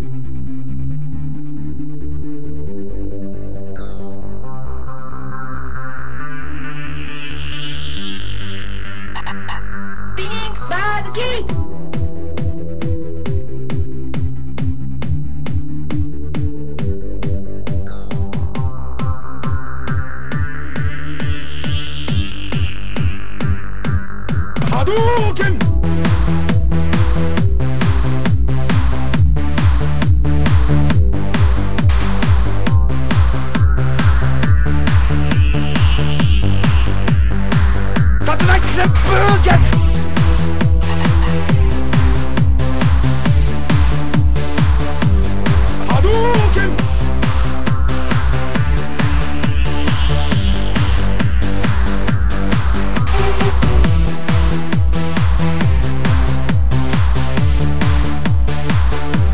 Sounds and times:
Techno: 0.0s - 59.3s.

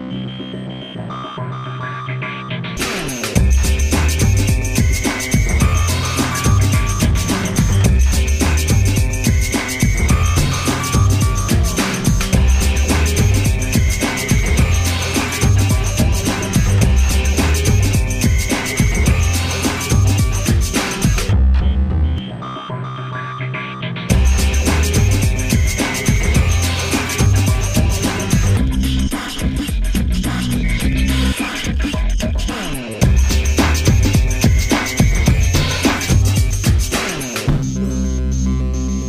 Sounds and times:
Music: 0.0s - 39.0s.

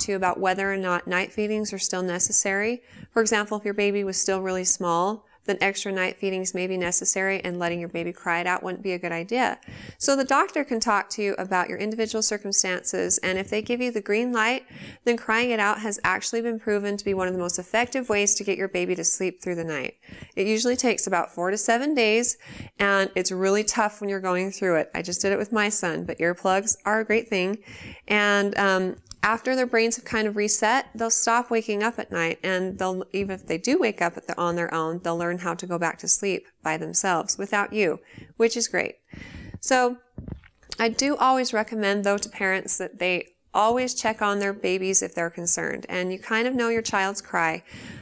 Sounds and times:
Speech: 0.0s - 39.0s, 39.6s - 47.6s.

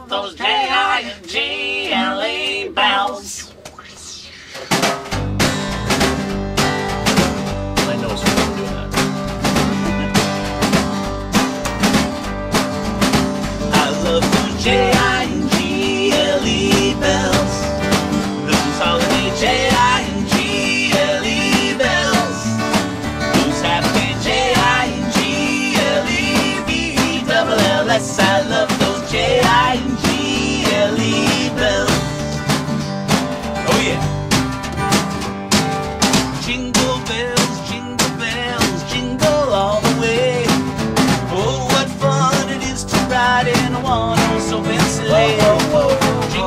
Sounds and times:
Music: 4.6s - 46.4s.

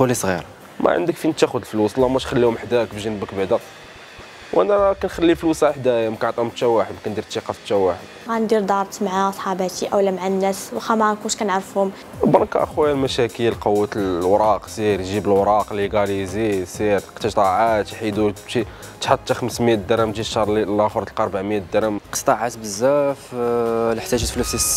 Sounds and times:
Speech: 0.0s - 3.6s, 4.6s - 24.7s
Music: 0.0s - 24.7s.

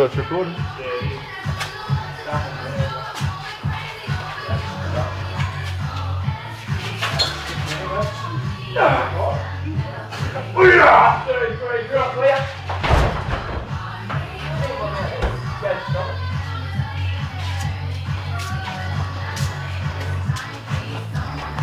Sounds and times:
Music: 0.0s - 21.6s
Speech: 10.3s - 12.6s.

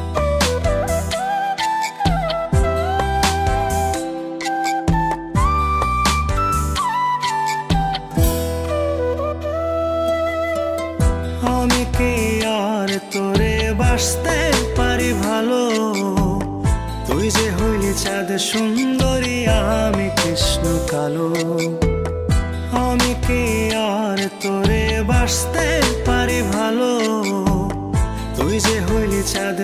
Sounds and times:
Music: 0.0s - 29.6s.

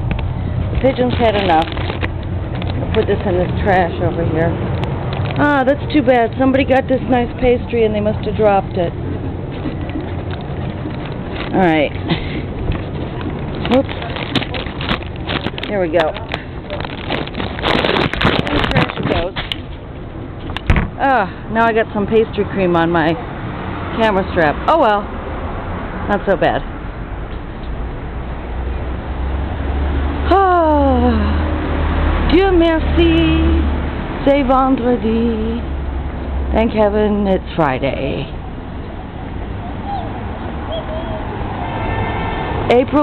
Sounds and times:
Car: 0.0s - 43.0s
Outside, urban or manmade: 0.0s - 43.0s.

